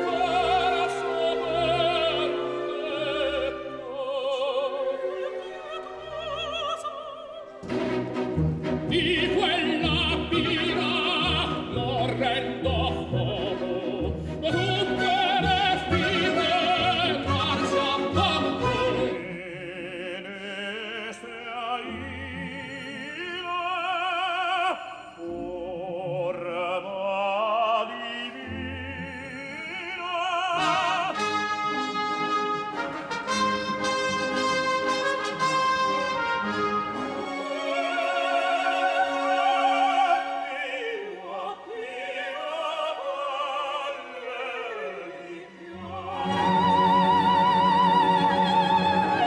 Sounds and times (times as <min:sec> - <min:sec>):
Opera: 0:00.0 - 0:49.2.